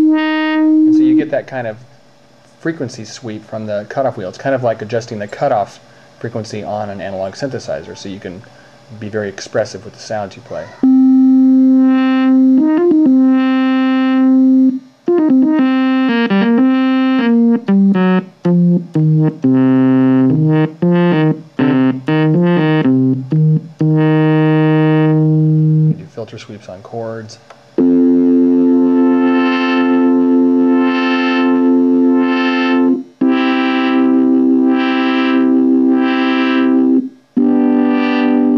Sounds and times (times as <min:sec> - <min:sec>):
Speech: 0:00.9 - 0:01.9, 0:02.6 - 0:10.8, 0:25.9 - 0:27.5
Synthesizer: 0:10.8 - 0:26.0, 0:27.8 - 0:38.5.